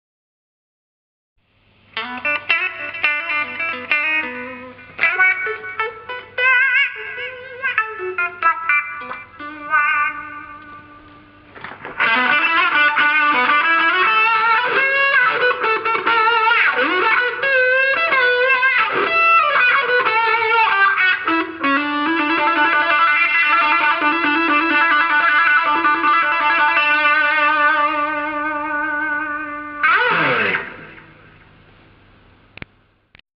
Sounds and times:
Music: 2.0 - 31.4.

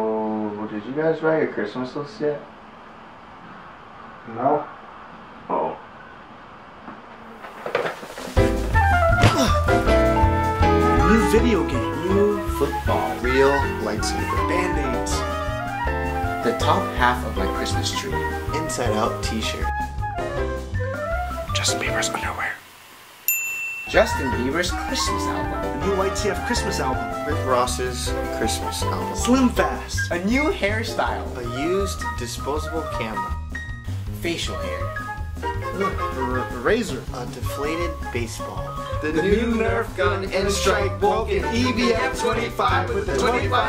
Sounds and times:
Speech: 0.0 - 2.5, 4.3 - 4.7, 5.5 - 5.8, 11.0 - 15.3, 16.4 - 19.7, 21.6 - 22.6, 23.9 - 33.3, 34.2 - 35.0, 35.8 - 43.6
Music: 8.4 - 22.6, 23.9 - 43.6.

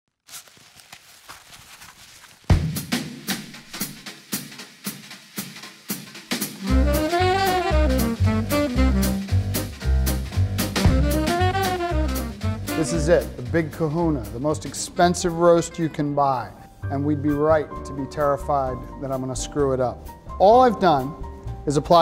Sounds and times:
Drum roll: 2.5 - 14.3.

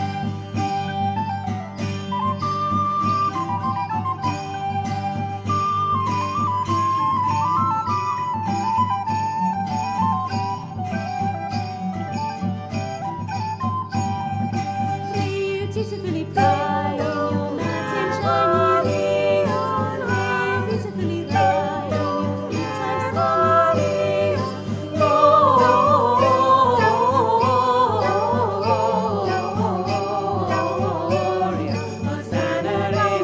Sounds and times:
Jingle, tinkle: 0.0 - 33.2.

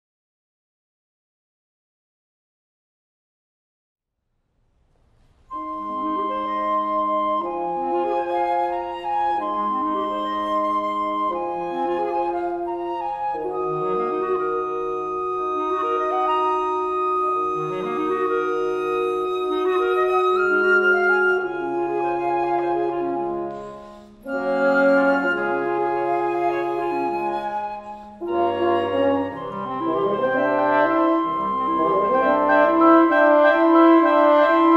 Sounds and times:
Music: 4.4 - 34.7.

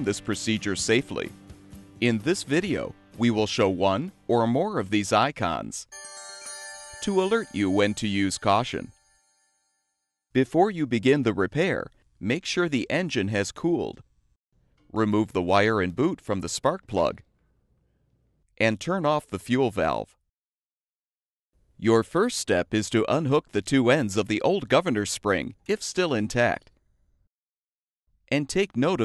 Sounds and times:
Speech: 0.0 - 1.3, 2.0 - 5.9, 7.0 - 8.9, 10.4 - 14.0, 14.9 - 17.2, 18.6 - 20.2, 21.8 - 26.7, 28.3 - 29.0.

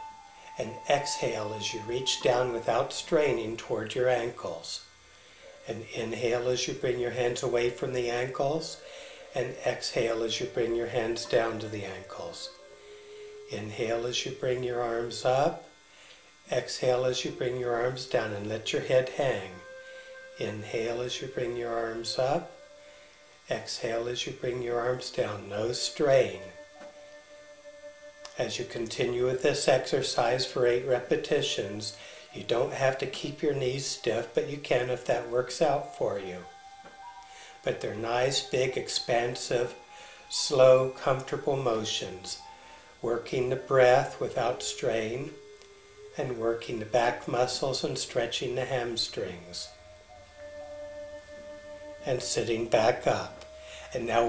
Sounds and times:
Music: 0.0 - 54.2
Speech: 0.6 - 4.9, 5.7 - 8.8, 9.4 - 12.6, 13.5 - 15.7, 16.5 - 19.6, 20.4 - 22.5, 23.5 - 26.6, 28.3 - 36.5, 37.7 - 42.4, 43.0 - 45.4, 46.2 - 49.8, 52.0 - 54.2.

